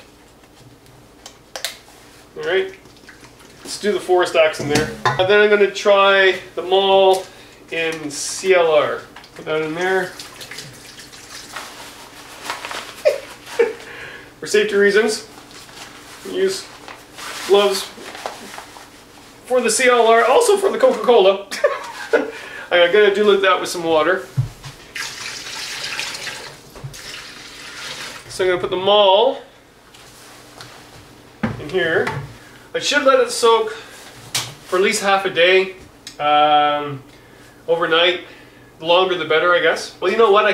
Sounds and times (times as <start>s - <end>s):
Sink (filling or washing): 9.5s - 11.8s, 24.8s - 28.3s.